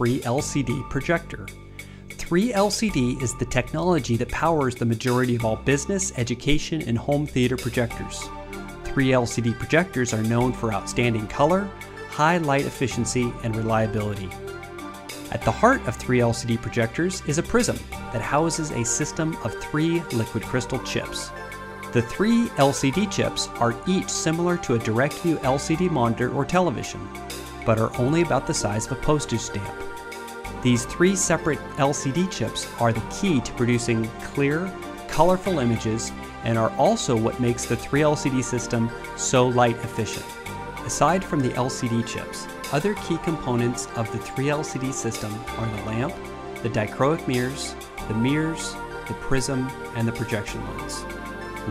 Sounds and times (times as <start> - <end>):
Speech: 0.0 - 1.5, 2.2 - 8.3, 8.9 - 14.4, 15.3 - 21.3, 22.0 - 29.8, 30.6 - 51.0
Music: 0.0 - 51.7.